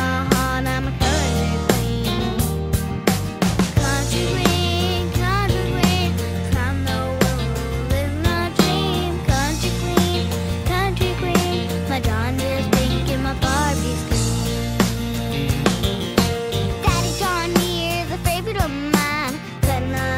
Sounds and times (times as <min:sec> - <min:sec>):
Music: 0:00.0 - 0:20.1.